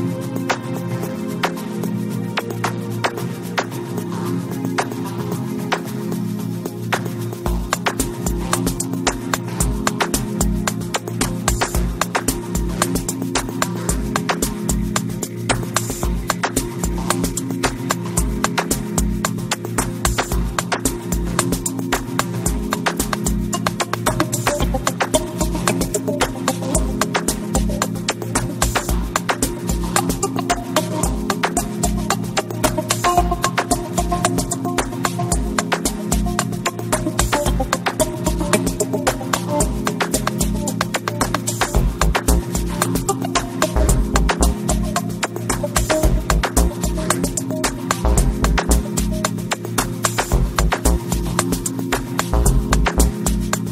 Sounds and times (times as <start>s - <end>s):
Music: 0.0s - 53.7s.